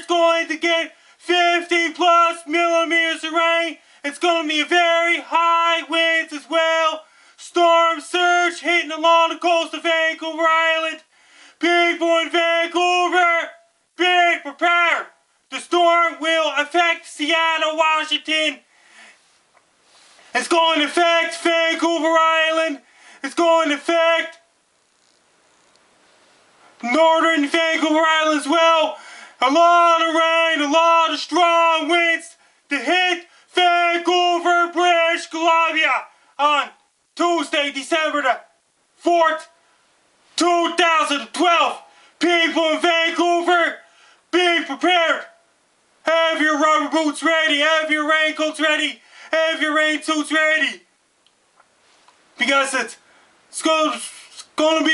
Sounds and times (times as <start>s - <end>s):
Speech: 0.0s - 18.7s, 20.3s - 24.5s, 26.8s - 39.6s, 40.4s - 45.4s, 46.0s - 50.9s, 52.4s - 54.9s.